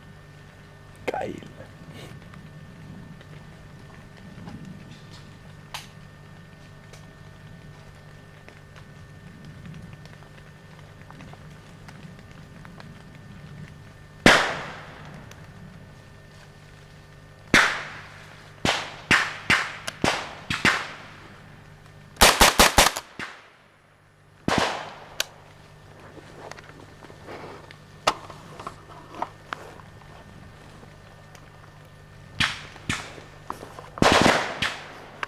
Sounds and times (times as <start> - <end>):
Gunshot, gunfire: 14.3 - 14.9, 17.6 - 18.0, 18.6 - 21.0, 22.2 - 23.5, 24.5 - 25.1, 34.0 - 35.0.